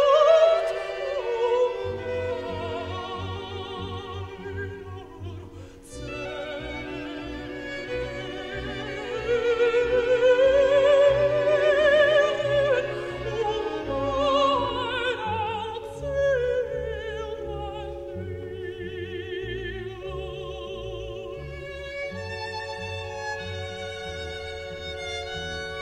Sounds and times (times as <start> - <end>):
Opera: 0.0 - 25.8.